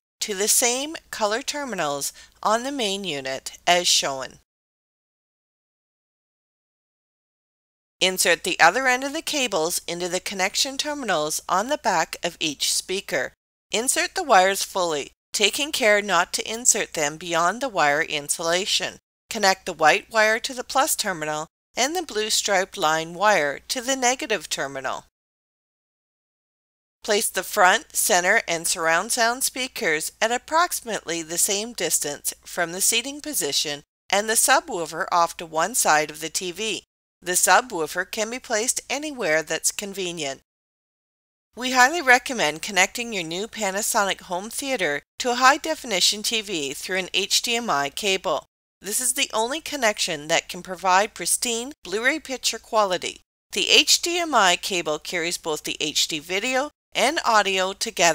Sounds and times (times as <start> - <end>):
Speech: 0.2 - 4.4, 8.0 - 25.1, 27.0 - 40.4, 41.6 - 58.1.